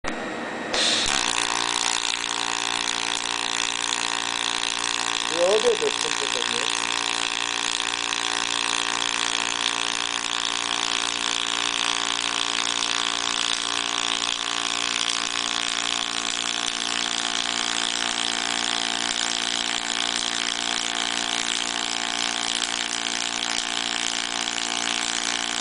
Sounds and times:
Speech: 5.3s - 6.7s.

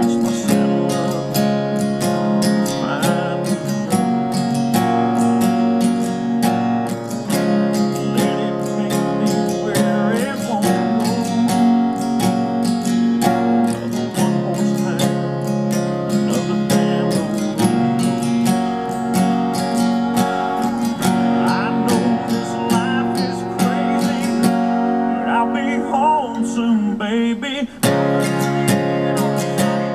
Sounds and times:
Acoustic guitar: 0.0s - 29.9s
Strum: 0.0s - 29.9s.

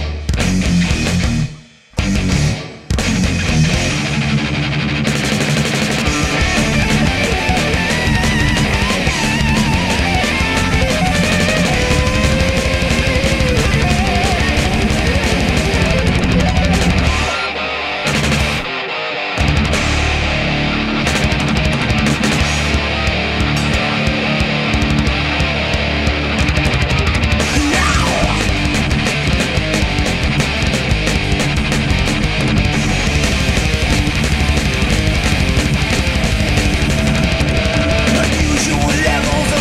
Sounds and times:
Music: 0.0s - 39.6s
Cacophony: 1.6s - 39.6s.

